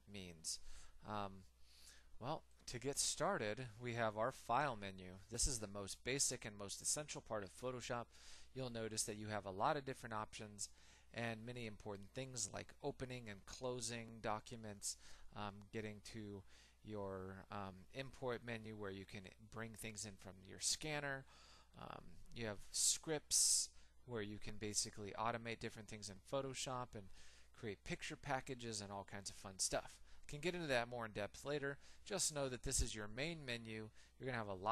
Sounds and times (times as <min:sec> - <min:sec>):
Speech: 0:00.0 - 0:01.5, 0:02.2 - 0:34.7.